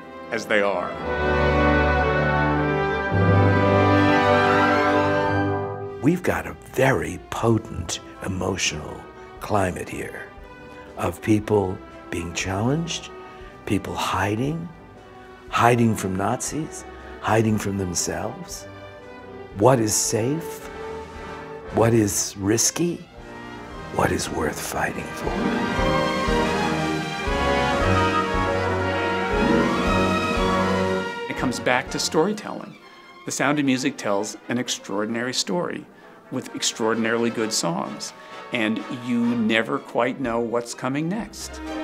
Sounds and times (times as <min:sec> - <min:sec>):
Tender music: 0:00.0 - 0:41.8
Exciting music: 0:00.1 - 0:35.4, 0:36.2 - 0:40.4, 0:41.0 - 0:41.8
Speech: 0:00.3 - 0:01.0, 0:06.0 - 0:10.3, 0:11.0 - 0:13.1, 0:13.7 - 0:14.8, 0:15.5 - 0:18.6, 0:19.6 - 0:20.7, 0:21.7 - 0:23.1, 0:24.0 - 0:25.4, 0:31.3 - 0:41.6.